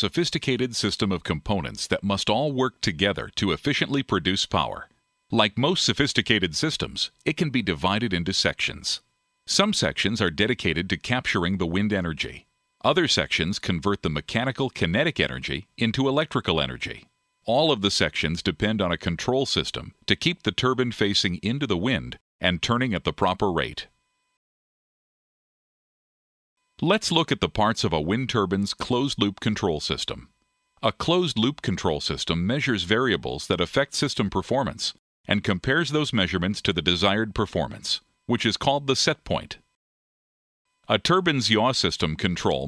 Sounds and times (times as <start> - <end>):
Speech: 0.0 - 23.9, 26.8 - 39.7, 40.9 - 42.6.